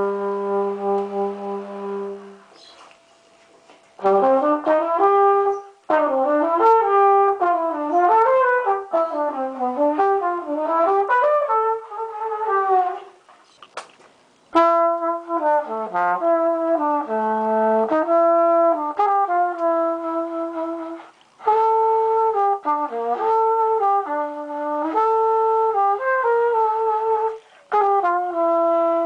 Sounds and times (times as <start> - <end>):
Music: 0.0 - 2.7, 4.0 - 13.2, 14.5 - 29.0.